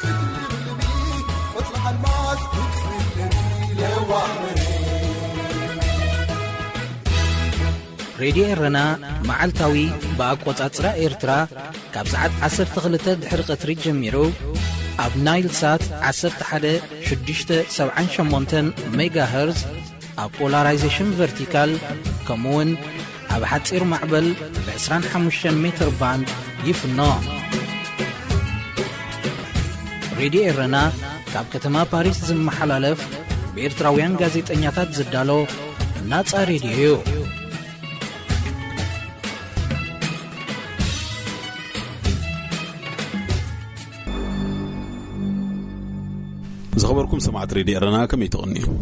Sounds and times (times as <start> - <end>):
Music: 0.0 - 48.8
Speech: 8.2 - 27.5, 30.2 - 37.4, 46.7 - 48.8.